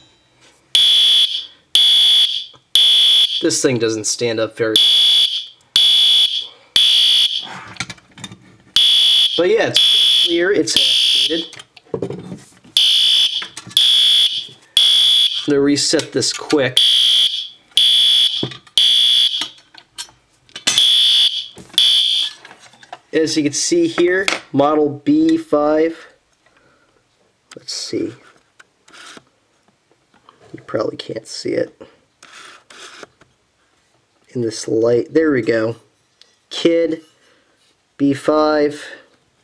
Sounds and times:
Fire alarm: 0:00.8 - 0:03.5, 0:04.8 - 0:07.5, 0:08.8 - 0:11.5, 0:12.8 - 0:15.5, 0:16.8 - 0:19.6, 0:20.8 - 0:22.4
Speech: 0:03.4 - 0:04.8, 0:09.4 - 0:11.5, 0:15.5 - 0:16.8, 0:23.1 - 0:26.2, 0:27.6 - 0:28.2, 0:30.5 - 0:31.9, 0:34.3 - 0:35.9, 0:36.5 - 0:37.1, 0:38.0 - 0:39.1.

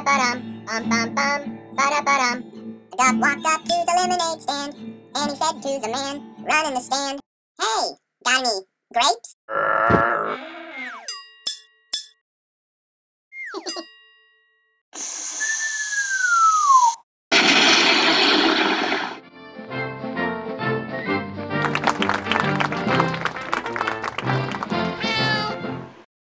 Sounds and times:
Music: 0:00.0 - 0:07.2, 0:19.2 - 0:26.1.

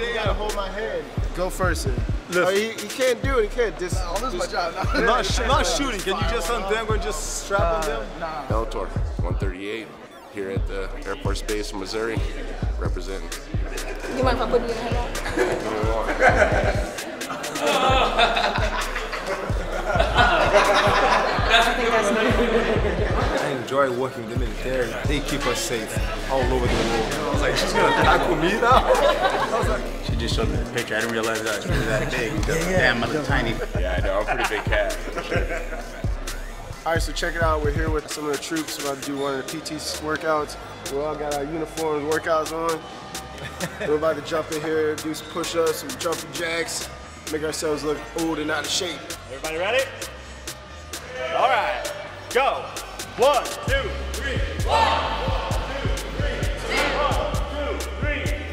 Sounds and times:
Speech: 0:00.0 - 0:13.4, 0:21.4 - 0:35.2, 0:36.8 - 0:42.8
Laughter: 0:13.6 - 0:23.4, 0:27.5 - 0:30.0, 0:33.4 - 0:36.2, 0:43.3 - 0:44.2.

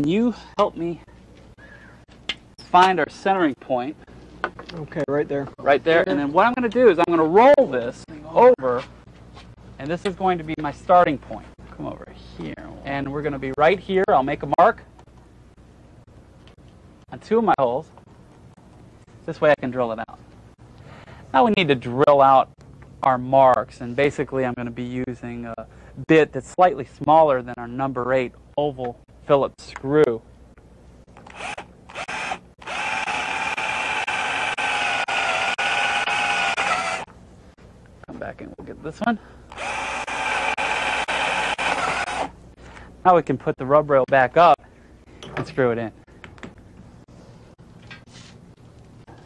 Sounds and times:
Speech: 0:00.0 - 0:01.1, 0:02.7 - 0:04.0, 0:04.7 - 0:08.9, 0:09.8 - 0:14.9, 0:17.1 - 0:17.9, 0:19.3 - 0:20.2, 0:21.3 - 0:30.2, 0:38.1 - 0:39.2, 0:43.0 - 0:44.6, 0:45.4 - 0:46.0.

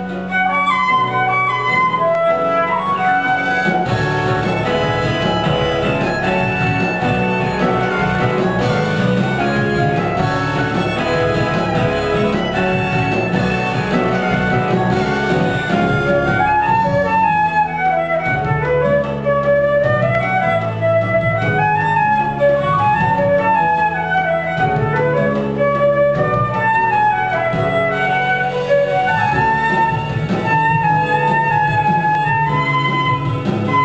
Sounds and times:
Flute: 0:00.0 - 0:33.8.

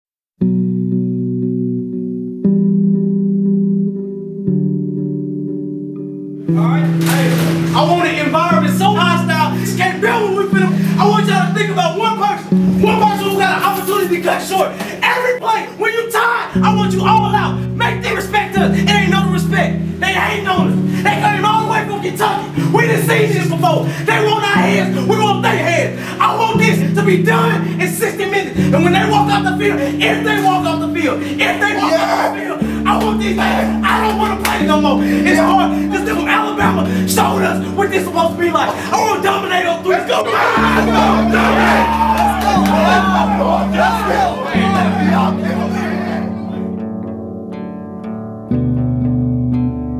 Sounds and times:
Music: 0:00.4 - 0:49.9
Speech: 0:06.6 - 0:41.8, 0:42.4 - 0:46.3.

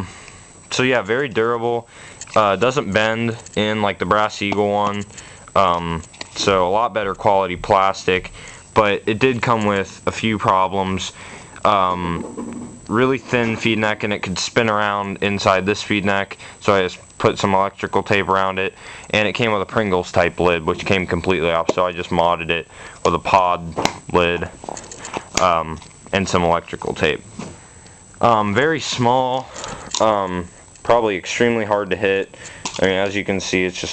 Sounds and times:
Speech: 0:00.7 - 0:12.3, 0:12.9 - 0:24.6, 0:25.4 - 0:27.2, 0:28.2 - 0:33.9.

